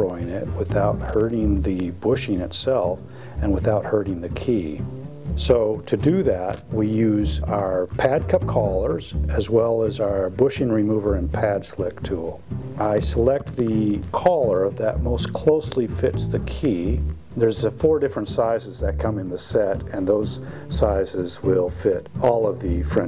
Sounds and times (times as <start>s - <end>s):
Speech: 0.0s - 4.8s, 5.4s - 23.0s
Music: 0.0s - 23.0s.